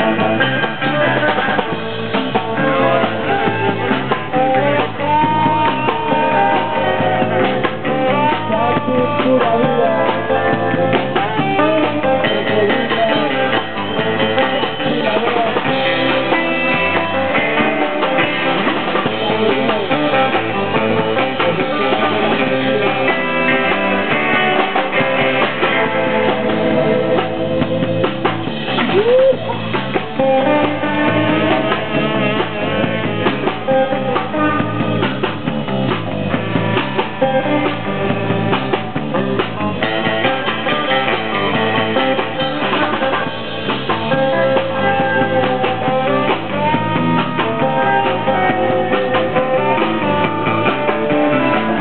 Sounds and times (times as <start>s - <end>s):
Music: 0.0s - 51.8s.